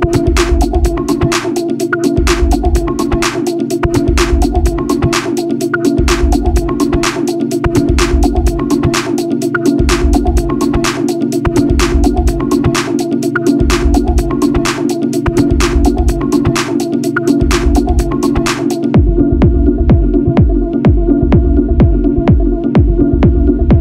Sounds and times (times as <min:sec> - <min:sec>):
Music: 0:00.0 - 0:23.8.